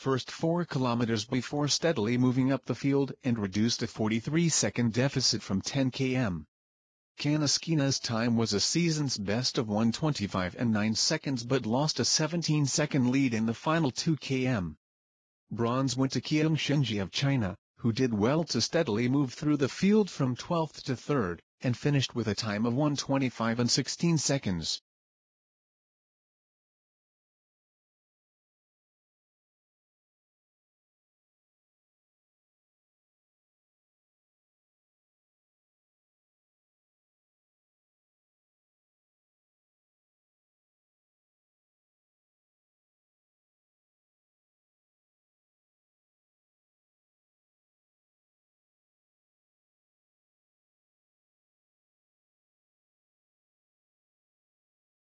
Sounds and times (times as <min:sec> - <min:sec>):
Speech: 0:00.0 - 0:06.5, 0:07.2 - 0:14.8, 0:15.5 - 0:24.8.